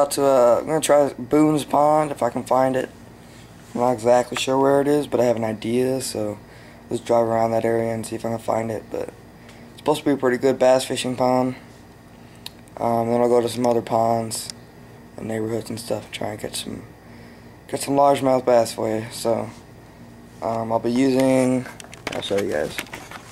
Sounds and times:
Speech: 0.0s - 3.0s, 3.8s - 9.2s, 9.8s - 11.7s, 12.8s - 14.6s, 15.2s - 16.9s, 17.7s - 19.6s, 20.4s - 22.9s.

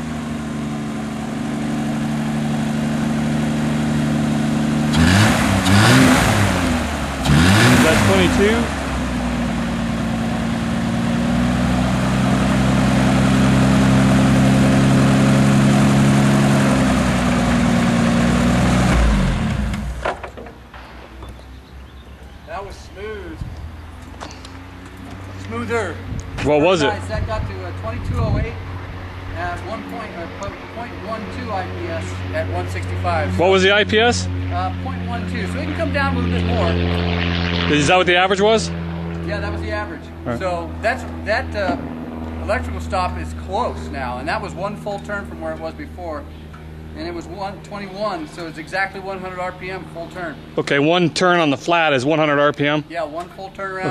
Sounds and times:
Vehicle: 0.0s - 53.9s
Speech: 7.8s - 8.7s, 22.5s - 23.4s, 25.4s - 28.6s, 29.4s - 37.0s, 37.7s - 41.8s, 42.4s - 46.3s, 47.0s - 53.9s.

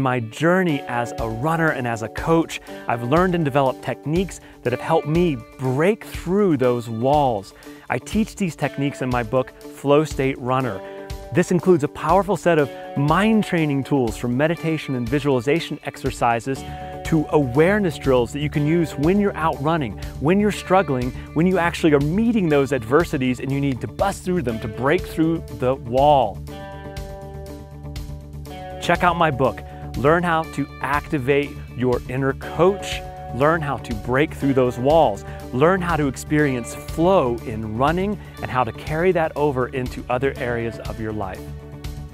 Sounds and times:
Speech: 0.0s - 26.4s, 28.8s - 41.4s
Music: 0.0s - 42.1s.

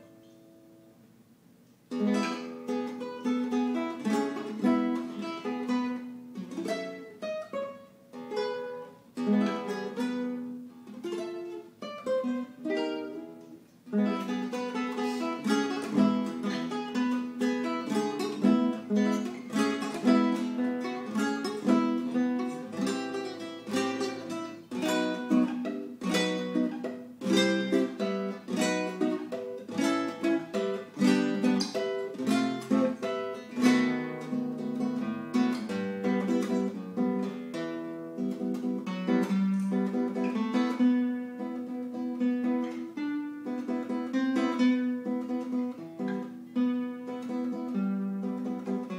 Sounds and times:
Guitar: 0.0s - 48.9s.

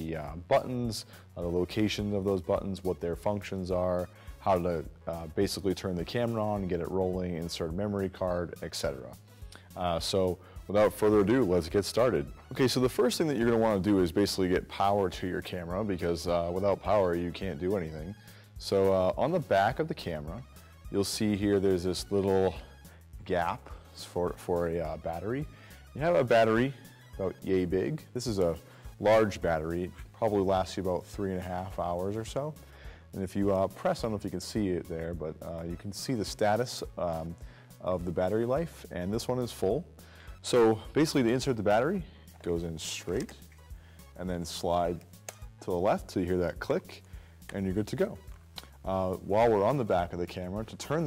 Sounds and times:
Speech: 0.0s - 32.6s, 33.2s - 43.4s, 44.2s - 51.0s
Music: 0.0s - 51.0s.

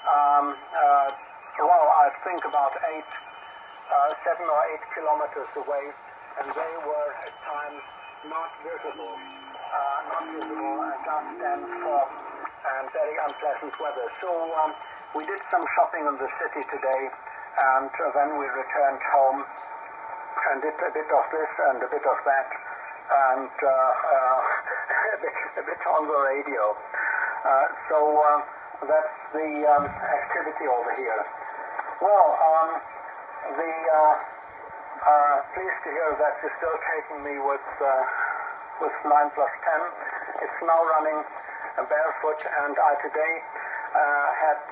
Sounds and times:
Radio: 0.0s - 44.7s
Speech: 0.1s - 3.2s, 3.9s - 19.5s, 20.4s - 31.4s, 32.0s - 34.3s, 35.0s - 44.7s.

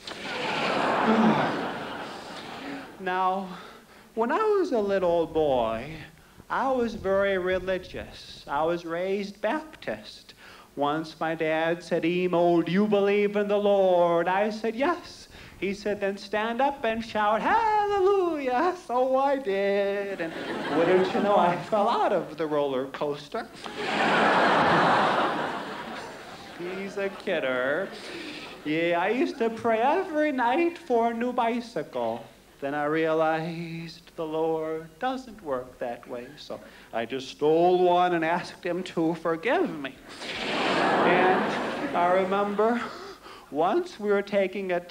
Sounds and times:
Male speech, man speaking: 3.0s - 3.6s, 4.2s - 23.6s, 26.4s - 28.0s, 28.6s - 40.0s, 41.1s - 44.9s.

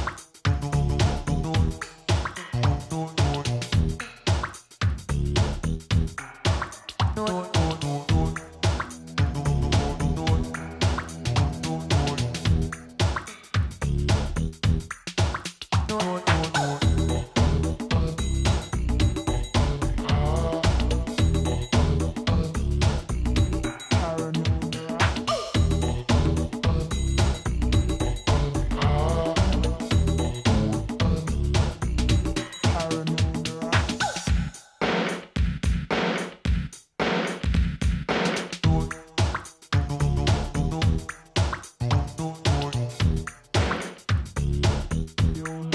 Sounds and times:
Music: 0.0s - 45.7s.

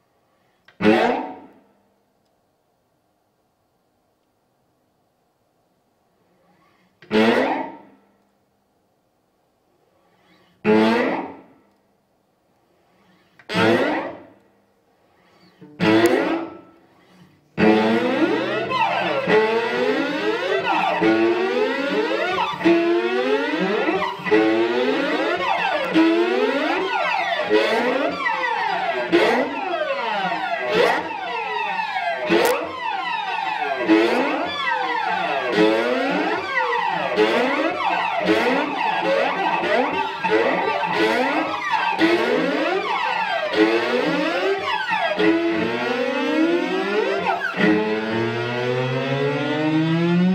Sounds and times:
Inside, large room or hall: 0.6s - 1.8s, 6.6s - 8.4s, 10.2s - 11.6s, 12.9s - 14.5s, 15.2s - 50.3s.

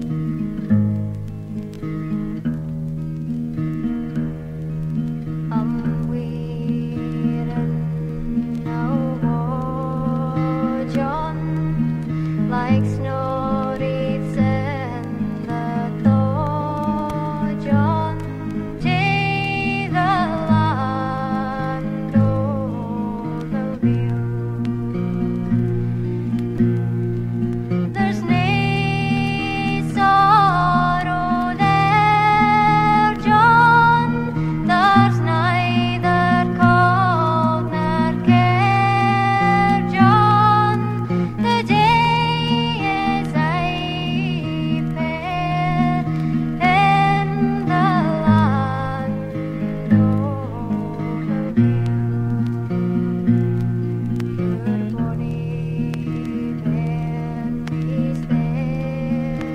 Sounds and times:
Folk music: 0.0s - 59.5s.

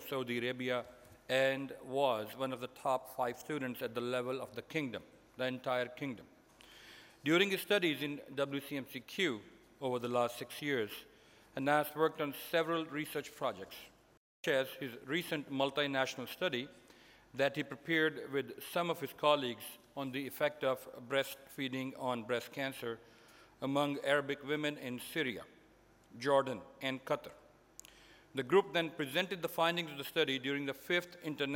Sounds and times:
Male speech, man speaking: 0.0s - 6.3s, 7.3s - 16.7s, 17.4s - 23.0s, 23.6s - 25.5s, 26.2s - 27.4s, 28.4s - 31.5s
Narration, monologue: 0.0s - 31.5s.

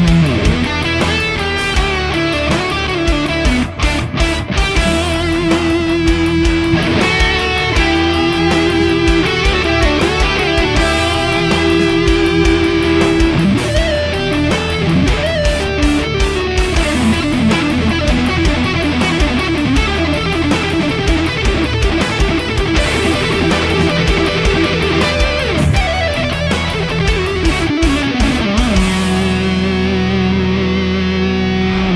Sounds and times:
Music: 0.0s - 31.9s.

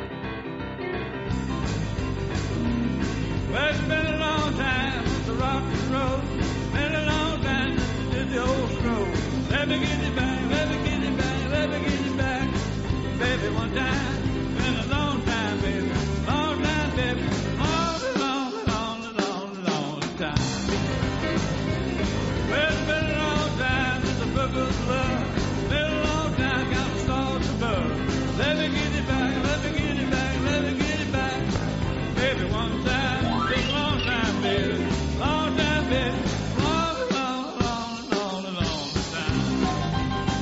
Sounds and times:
Music: 0.0s - 40.4s.

